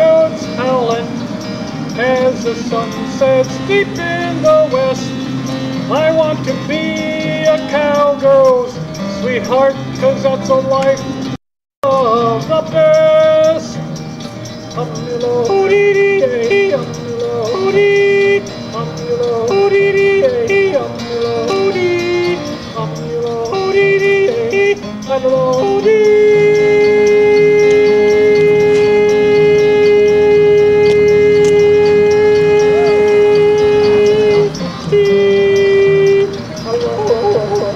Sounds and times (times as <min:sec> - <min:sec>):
Theremin: 0:25.8 - 0:37.7.